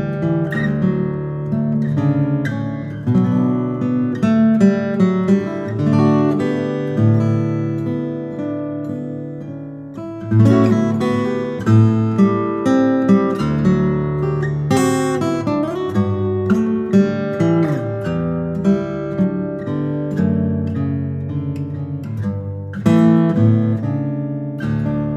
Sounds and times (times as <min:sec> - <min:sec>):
Guitar: 0:00.0 - 0:25.1.